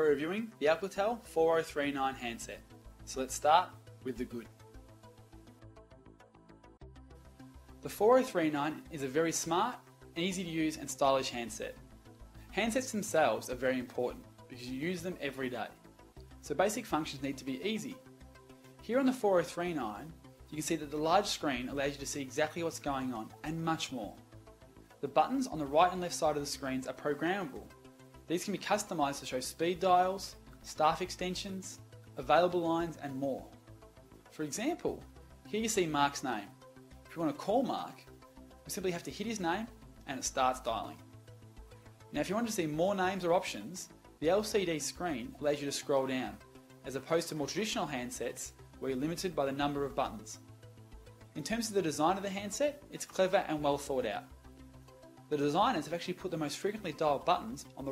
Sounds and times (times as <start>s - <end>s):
Speech: 0.0s - 4.5s, 7.8s - 11.8s, 12.6s - 15.8s, 16.4s - 18.0s, 18.8s - 24.2s, 25.0s - 27.7s, 28.3s - 33.5s, 34.4s - 36.5s, 37.1s - 38.0s, 38.7s - 41.0s, 42.1s - 50.4s, 51.4s - 54.3s, 55.3s - 57.9s
Music: 0.0s - 57.9s.